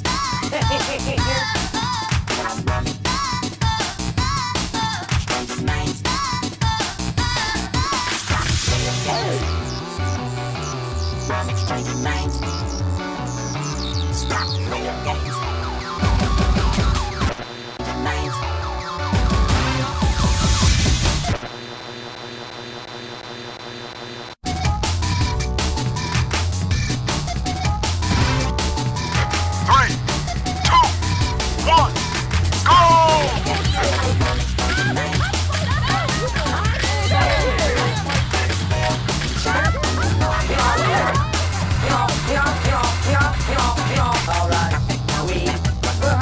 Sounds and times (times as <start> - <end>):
Music: 0.0 - 21.4, 24.4 - 46.2.